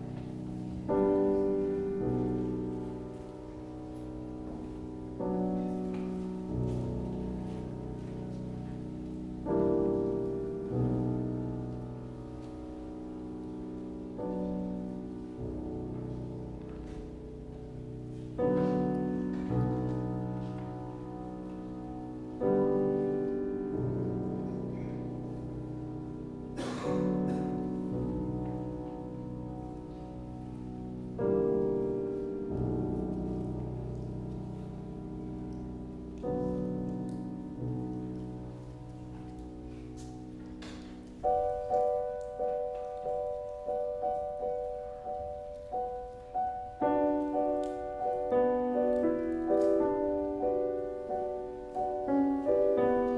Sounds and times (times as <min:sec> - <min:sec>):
Music: 0:00.0 - 0:53.1.